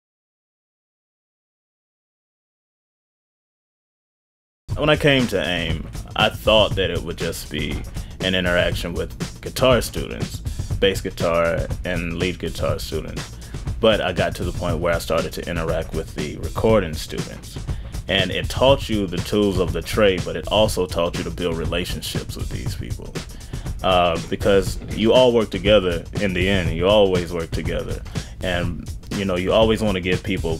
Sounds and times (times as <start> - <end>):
Music: 4.7 - 30.5
Speech: 4.8 - 23.2, 23.8 - 30.5.